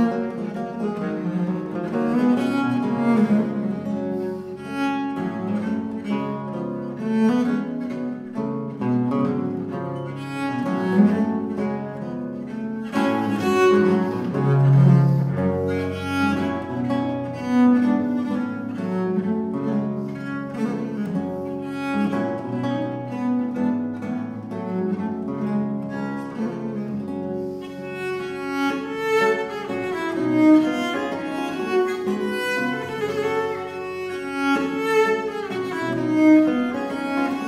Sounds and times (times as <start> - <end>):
Cello: 0.0 - 37.4
Classical music: 0.0 - 37.4
Guitar: 0.0 - 37.4
String section: 0.0 - 37.4
Double bass: 10.3 - 36.8.